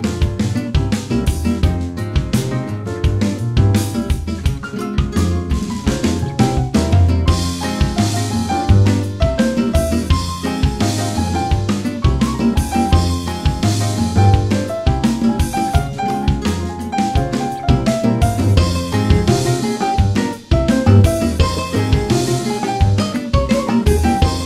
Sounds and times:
Jazz: 0.0 - 24.4.

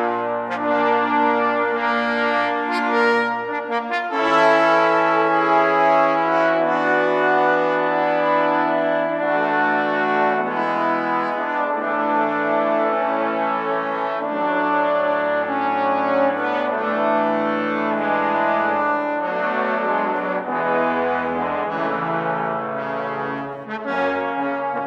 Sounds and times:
Trombone: 0.0 - 24.8.

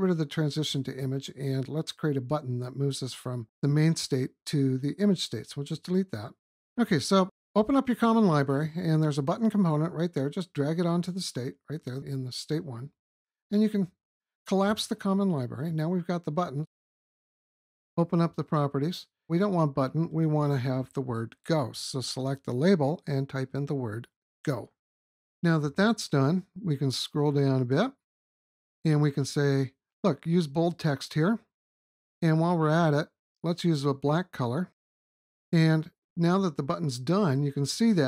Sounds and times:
Speech synthesizer: 0.1 - 12.9, 13.5 - 13.9, 14.5 - 16.7, 18.0 - 24.7, 25.5 - 27.9, 28.9 - 31.4, 32.2 - 34.7, 35.6 - 38.0.

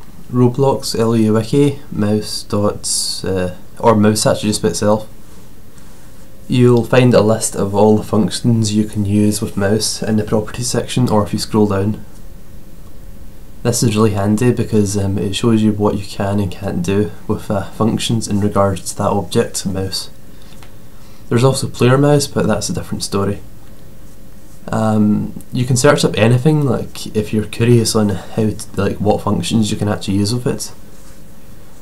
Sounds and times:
Speech: 0.3 - 5.2, 6.5 - 12.1, 13.6 - 20.2, 21.3 - 23.5, 24.6 - 30.8.

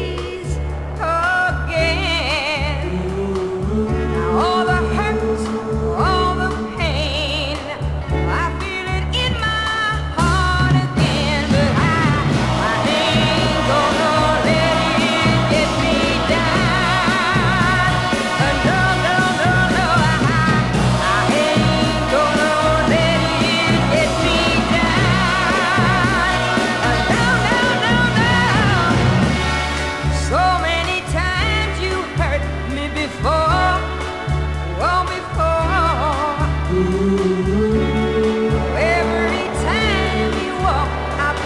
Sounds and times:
Music: 0.0 - 41.4.

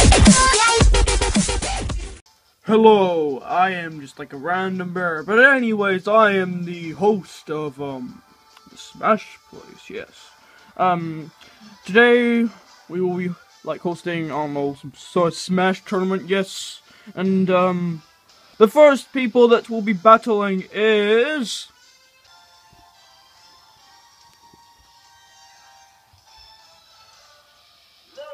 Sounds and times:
Speech: 2.7 - 8.2, 8.8 - 18.0, 18.6 - 21.7.

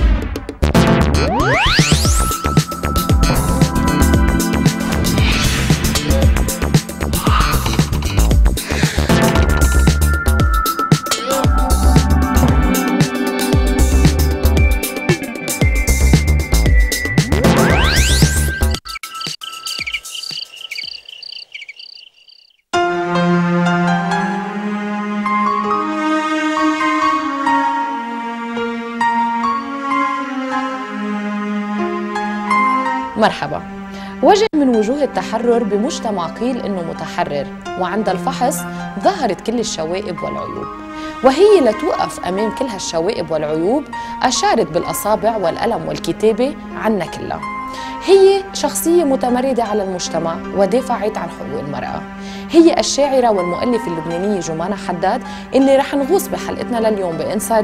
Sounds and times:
Music: 0.0 - 18.9, 22.7 - 57.6.

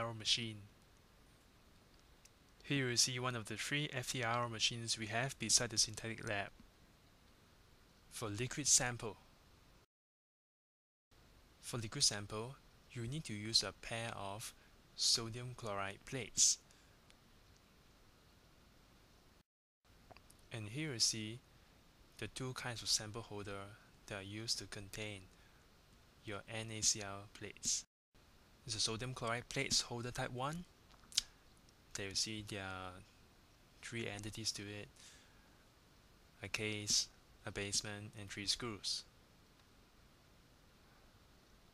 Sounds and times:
Speech: 0.0 - 0.7, 2.6 - 6.6, 8.1 - 9.3, 11.6 - 16.6, 20.5 - 21.4, 22.2 - 25.3, 26.2 - 27.9, 28.6 - 31.3, 32.0 - 33.1, 33.8 - 35.0, 36.4 - 39.1.

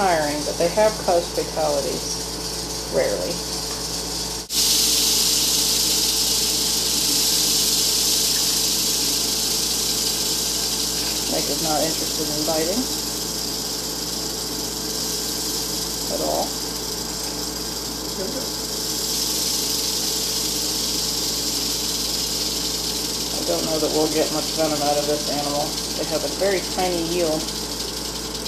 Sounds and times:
Speech: 0.0 - 2.2, 2.9 - 3.4, 11.3 - 12.9, 16.1 - 16.5, 18.1 - 18.5, 23.3 - 27.5
Inside, small room: 0.0 - 28.4.

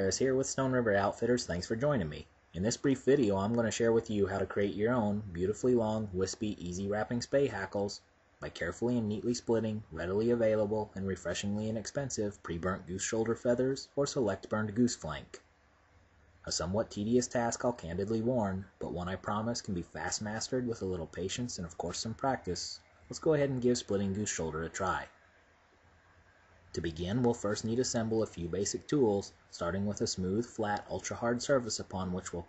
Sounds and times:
Speech: 0.0 - 15.5, 16.4 - 25.2, 26.7 - 32.4.

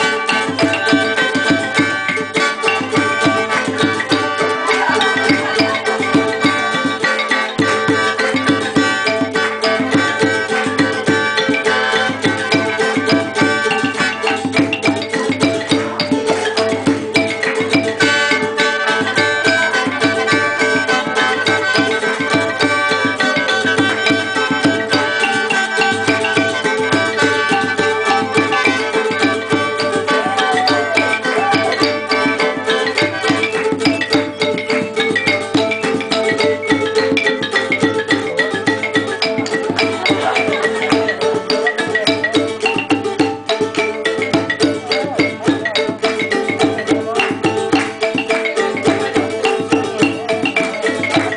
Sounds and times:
Folk music: 0.0 - 51.3.

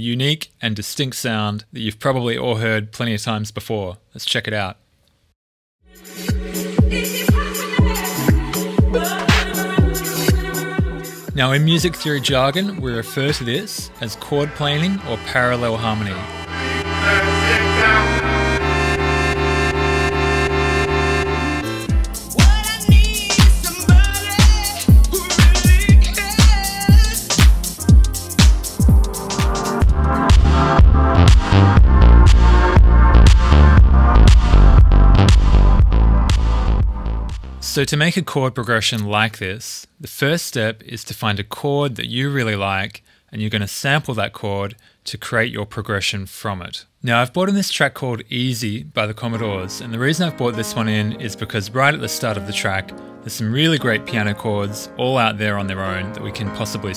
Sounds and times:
Speech: 0.0 - 4.8, 11.3 - 16.3, 17.0 - 18.2, 37.6 - 56.9
House music: 5.9 - 37.7.

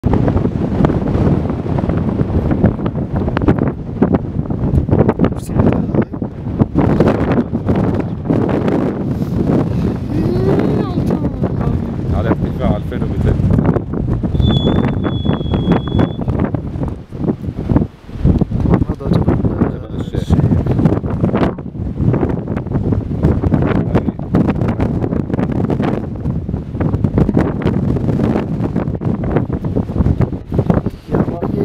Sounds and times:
Wind noise (microphone): 0.0 - 31.6
Speech: 5.4 - 6.1, 10.1 - 13.4, 18.8 - 20.5, 31.1 - 31.6.

